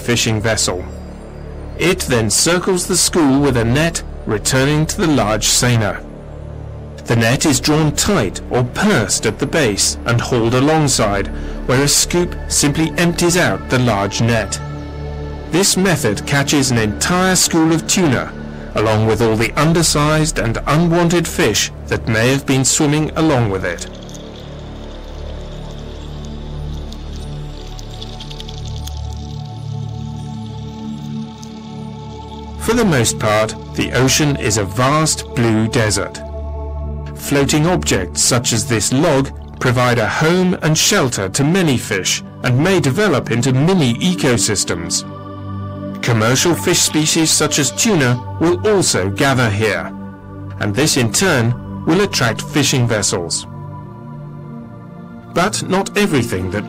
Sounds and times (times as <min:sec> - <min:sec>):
Speech: 0:00.0 - 0:00.9, 0:01.8 - 0:06.0, 0:07.0 - 0:14.6, 0:15.6 - 0:23.9, 0:32.6 - 0:36.2, 0:37.2 - 0:45.0, 0:46.0 - 0:49.9, 0:50.6 - 0:53.5, 0:55.4 - 0:56.6
Music: 0:00.0 - 0:56.6.